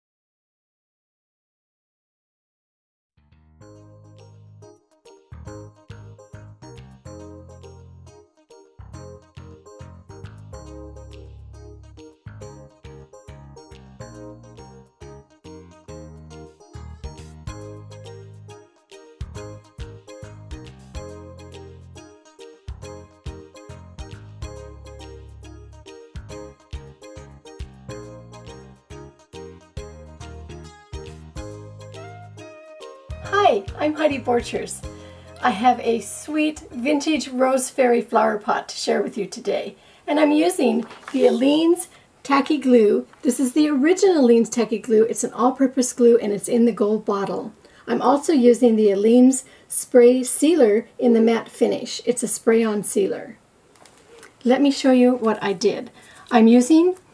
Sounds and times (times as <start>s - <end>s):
Jingle, tinkle: 3.6s - 35.5s.